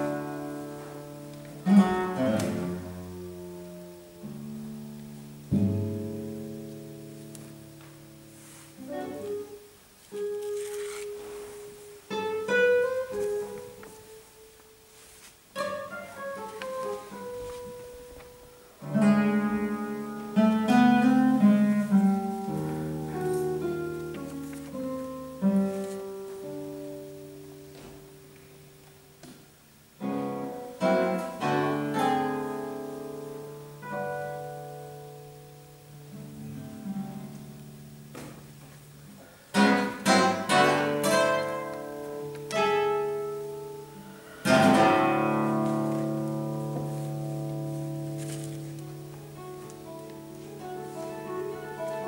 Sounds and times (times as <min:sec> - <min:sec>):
Acoustic guitar: 0:00.0 - 0:52.0.